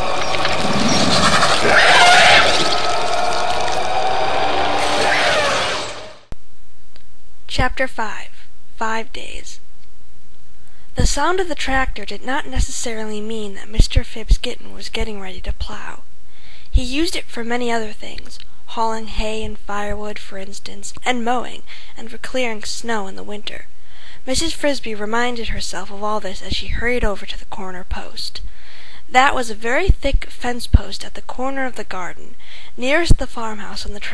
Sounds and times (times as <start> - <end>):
Speech: 7.5 - 9.6, 11.0 - 16.0, 16.7 - 28.4, 29.1 - 34.1.